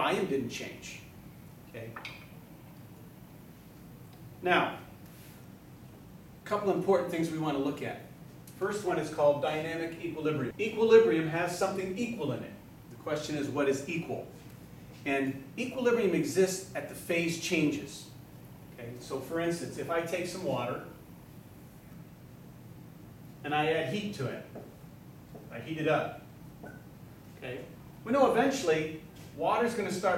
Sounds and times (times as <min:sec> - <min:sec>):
Speech: 0:00.0 - 0:01.1, 0:01.7 - 0:02.0, 0:04.4 - 0:04.9, 0:06.4 - 0:14.4, 0:15.0 - 0:18.2, 0:18.8 - 0:21.0, 0:23.4 - 0:24.6, 0:25.5 - 0:26.2, 0:27.4 - 0:30.1.